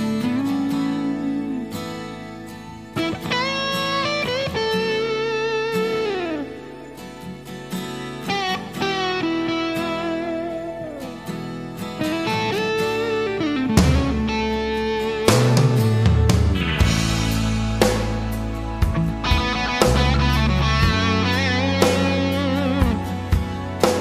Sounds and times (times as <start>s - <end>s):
Music: 0.0s - 24.0s.